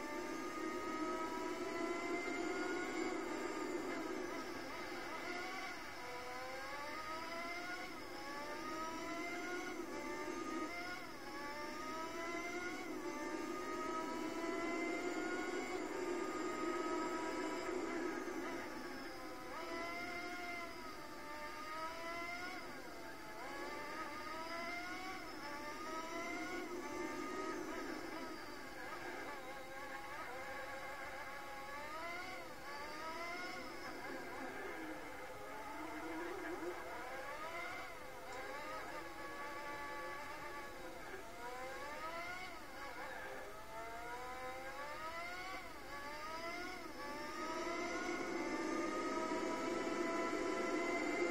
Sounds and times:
Race car, auto racing: 0.0 - 51.3.

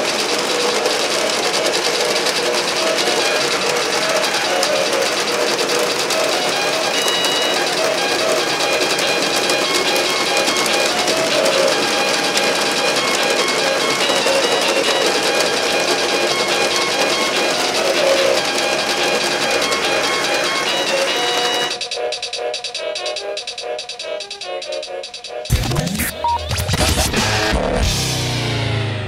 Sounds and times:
Music: 0.0 - 29.0.

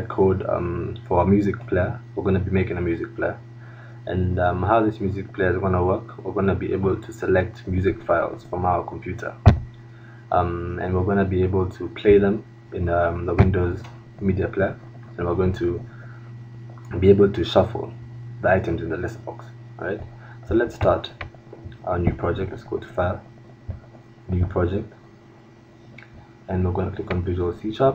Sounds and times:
Speech: 0.0 - 3.4, 4.1 - 9.4, 10.3 - 15.9, 16.9 - 23.2, 24.3 - 25.0, 26.5 - 27.9.

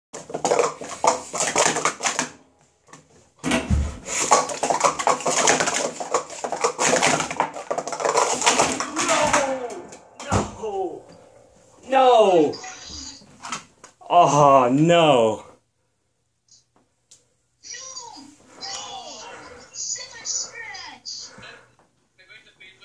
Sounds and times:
Inside, small room: 0.2 - 22.8.

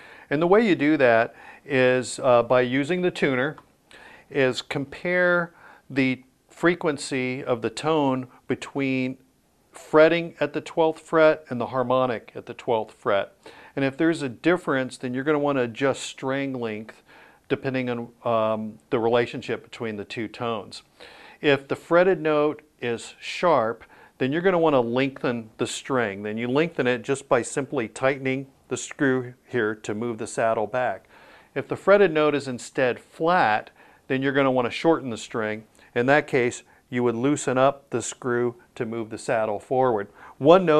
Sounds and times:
Speech: 0.3 - 3.6, 4.3 - 9.2, 9.8 - 40.7.

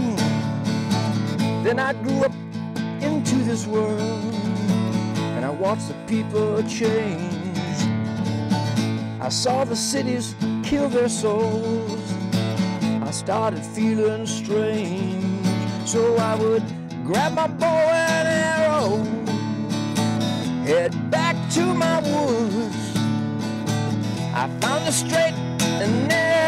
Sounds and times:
Music: 0.0 - 26.4.

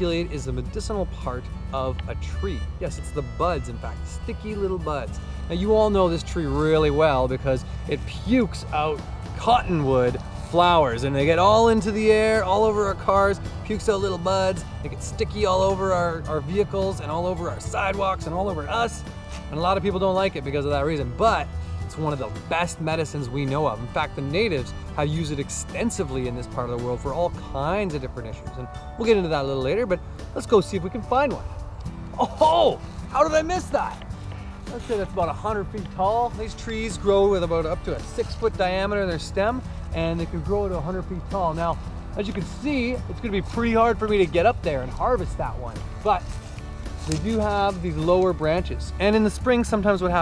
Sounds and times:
Speech: 0.0 - 31.4, 32.2 - 34.0, 34.7 - 46.3, 47.0 - 50.2
Music: 0.0 - 50.2.

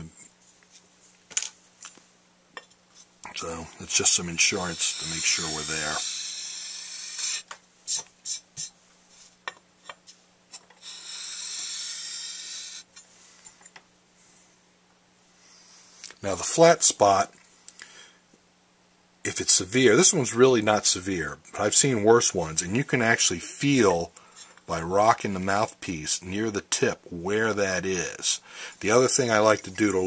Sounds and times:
Speech: 0.0 - 0.2, 3.3 - 6.0, 16.2 - 17.4, 19.3 - 30.0
Inside, small room: 0.0 - 30.0.

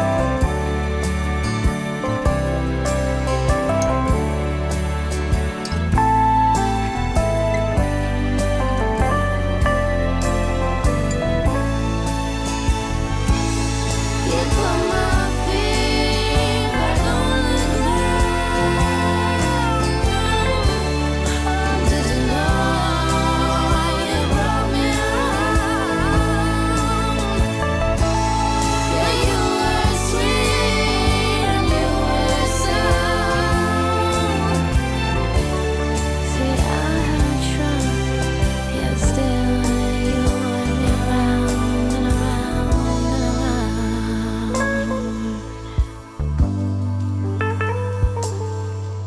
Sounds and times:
Music: 0.0 - 49.0.

